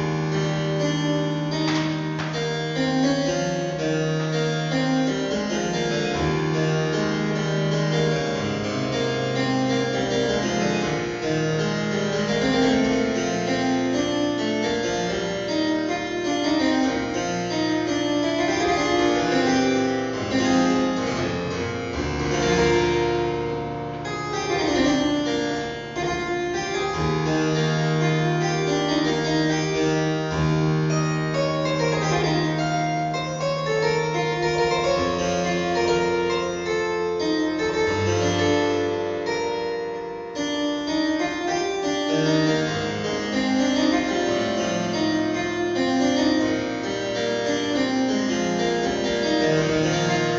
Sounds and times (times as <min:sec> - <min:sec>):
Harpsichord: 0:00.0 - 0:50.3.